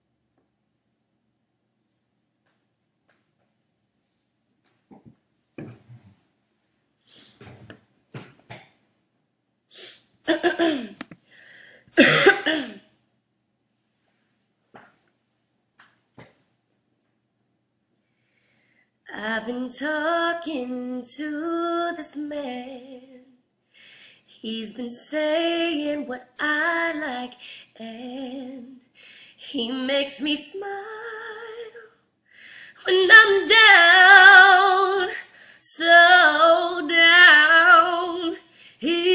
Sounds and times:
Female singing: 19.1 - 23.3, 24.4 - 28.8, 29.4 - 31.9, 32.8 - 39.1.

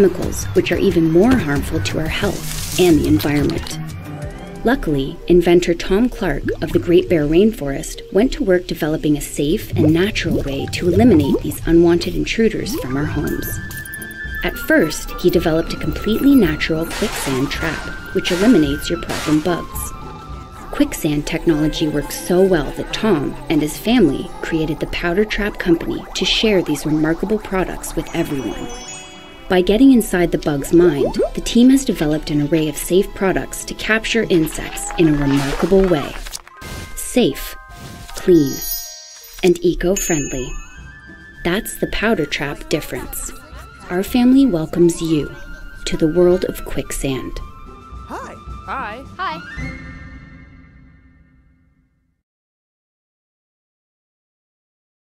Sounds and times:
Speech: 0.0 - 3.8, 4.7 - 13.6, 14.4 - 19.9, 20.8 - 28.8, 29.5 - 36.2, 38.2 - 38.7, 39.4 - 40.5, 41.5 - 47.4, 48.1 - 49.5
Music: 0.0 - 52.2.

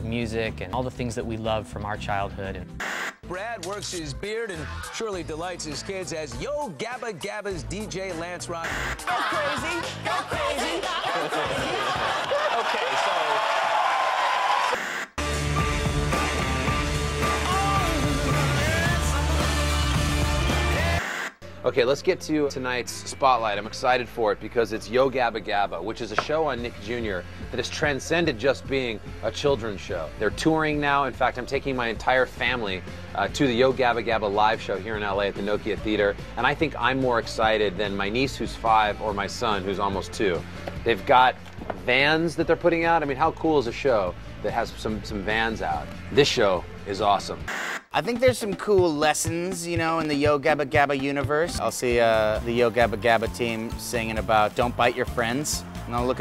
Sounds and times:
Speech: 0.0 - 2.7, 3.3 - 8.6, 21.6 - 56.2
Music: 0.0 - 13.6, 15.2 - 56.2.

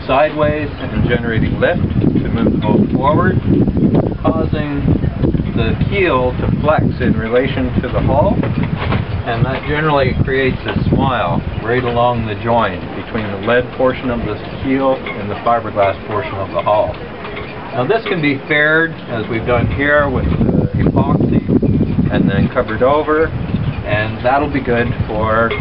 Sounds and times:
Speech: 0.0 - 3.4, 4.2 - 4.9, 5.6 - 8.4, 9.3 - 17.0, 17.8 - 21.5, 22.1 - 25.6.

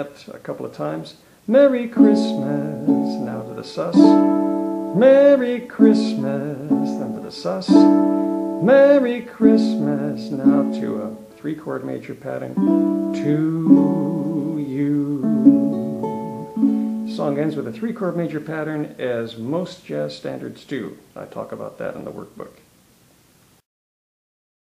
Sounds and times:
Speech: 0.0 - 4.2, 5.3 - 7.8, 8.7 - 12.6, 17.1 - 22.7
Inside, small room: 0.0 - 23.6
Ukulele: 1.5 - 18.4.

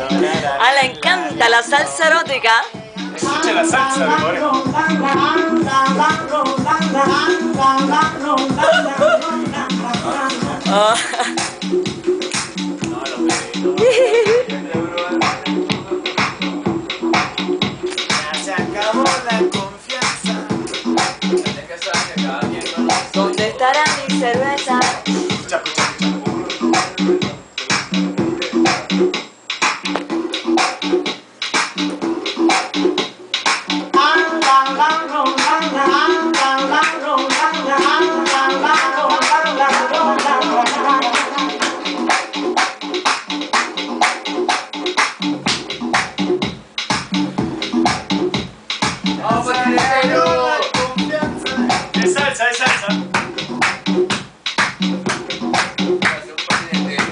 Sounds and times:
Music: 0.0 - 57.1.

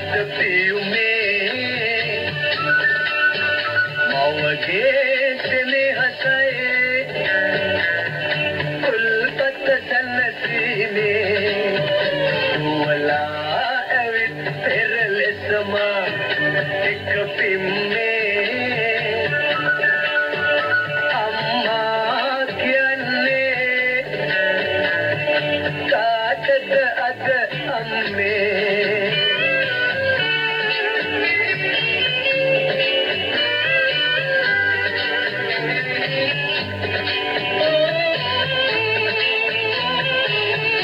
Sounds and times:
Music: 0.0 - 40.8.

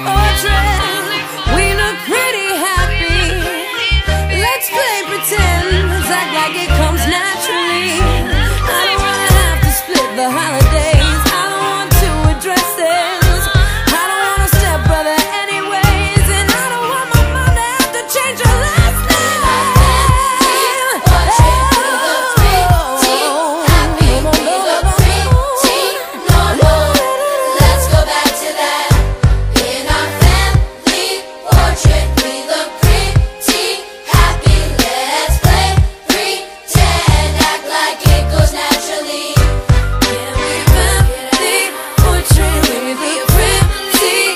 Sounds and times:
Music: 0.0 - 44.3.

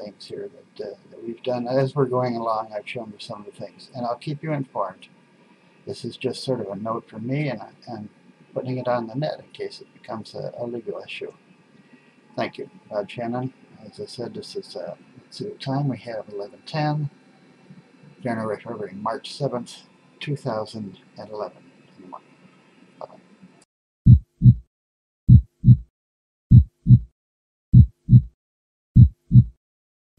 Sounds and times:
Speech: 0.0 - 5.1, 5.9 - 11.4, 12.4 - 17.2, 18.2 - 22.3.

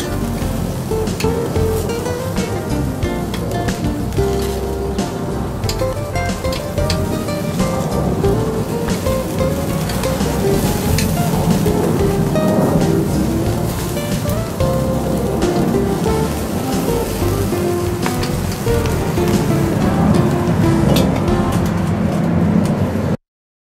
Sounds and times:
Music: 0.0 - 22.6.

